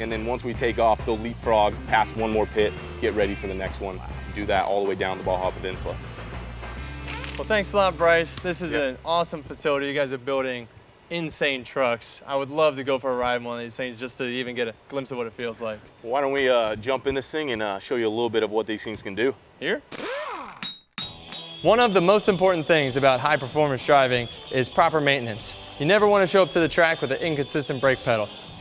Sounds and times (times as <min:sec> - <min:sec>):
Speech: 0:00.0 - 0:06.0, 0:07.4 - 0:19.9, 0:21.7 - 0:28.6
Music: 0:00.0 - 0:09.7, 0:21.0 - 0:28.6.